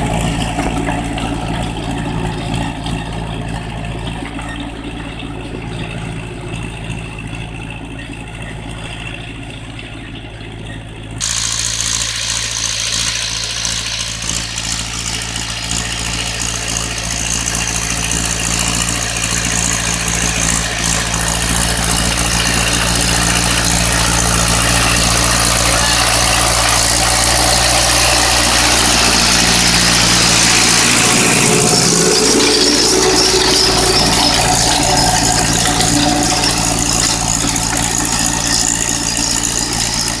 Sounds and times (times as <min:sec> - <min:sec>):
Heavy engine (low frequency): 0:00.0 - 0:40.2
Vehicle: 0:00.0 - 0:40.2
Accelerating, revving, vroom: 0:19.4 - 0:37.4.